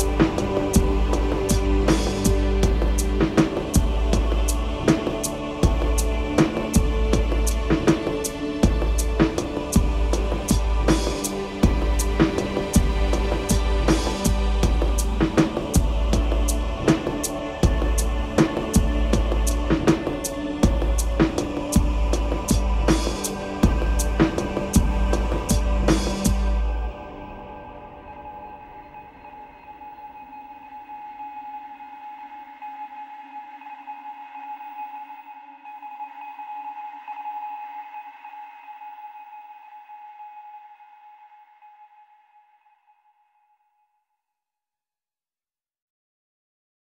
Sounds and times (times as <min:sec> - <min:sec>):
Sonar: 0:22.9 - 0:44.4.